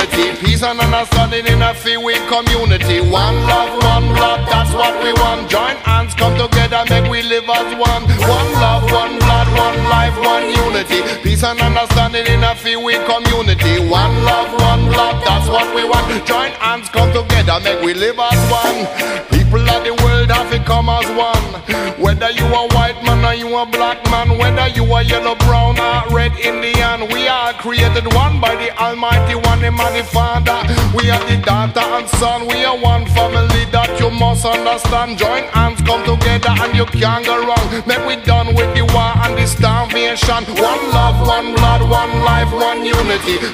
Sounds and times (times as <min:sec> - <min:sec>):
Music: 0:00.0 - 0:43.5.